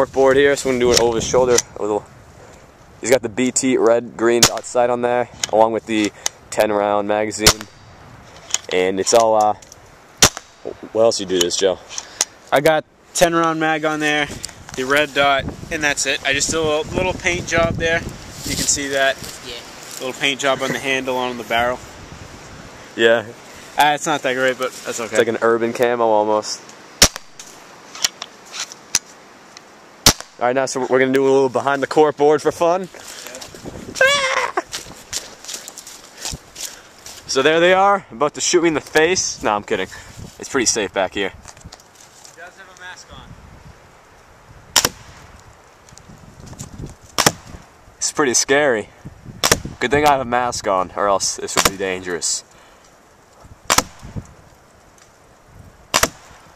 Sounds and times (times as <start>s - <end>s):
Speech: 0.0s - 2.0s, 3.0s - 7.7s, 8.7s - 9.6s, 12.5s - 21.8s, 23.0s - 26.6s, 30.4s - 33.5s, 37.3s - 41.4s, 42.4s - 43.3s, 49.8s - 52.5s.